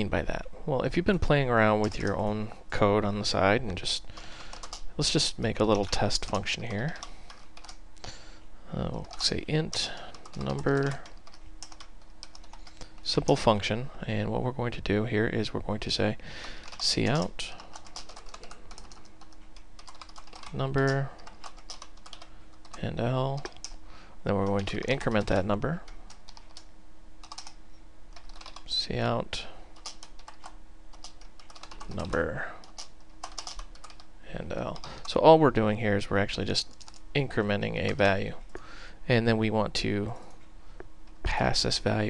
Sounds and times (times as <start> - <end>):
Computer keyboard: 1.8 - 2.2, 4.4 - 4.8, 5.7 - 7.8, 8.9 - 13.1, 16.4 - 22.8, 23.4 - 23.8, 24.4 - 28.7, 29.8 - 34.1, 36.7 - 37.0.